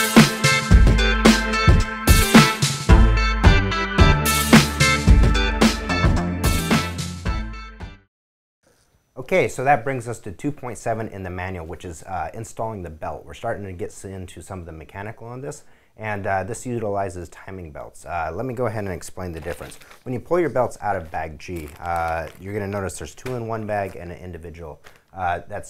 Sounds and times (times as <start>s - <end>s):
Speech: 9.2s - 25.6s.